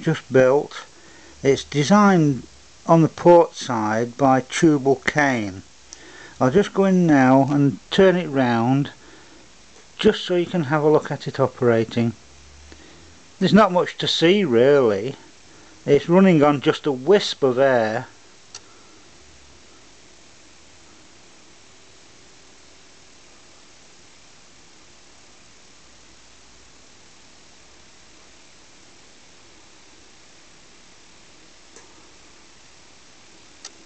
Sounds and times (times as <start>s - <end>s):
Speech: 0.0s - 5.6s, 6.4s - 9.0s, 10.0s - 12.2s, 13.4s - 15.2s, 15.9s - 18.1s.